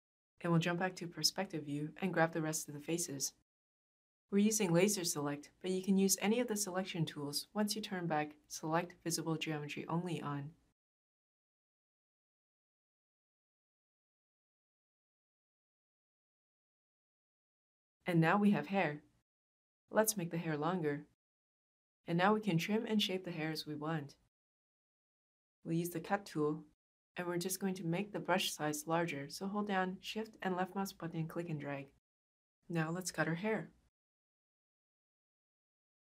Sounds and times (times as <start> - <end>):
Speech: 0.4 - 3.4, 4.3 - 10.6, 18.1 - 19.0, 19.9 - 21.2, 22.1 - 24.2, 25.7 - 32.0, 32.7 - 33.8
Inside, small room: 4.3 - 10.8, 25.6 - 32.0.